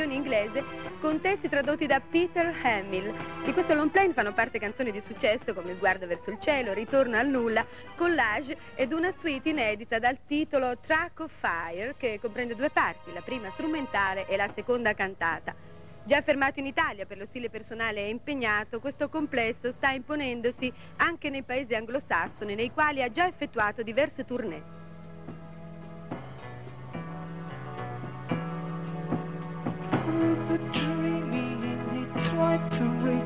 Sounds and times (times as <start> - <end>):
Speech: 0.0 - 24.6
Music: 0.0 - 33.2.